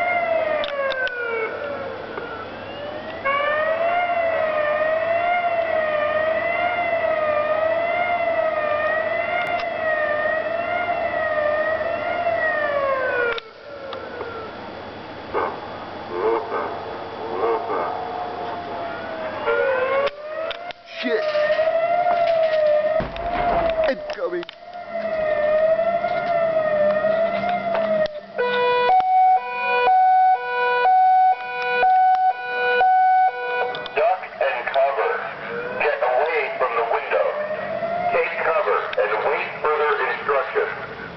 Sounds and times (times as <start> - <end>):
Speech: 20.9 - 21.4, 23.9 - 24.5, 34.0 - 37.4, 38.1 - 40.9.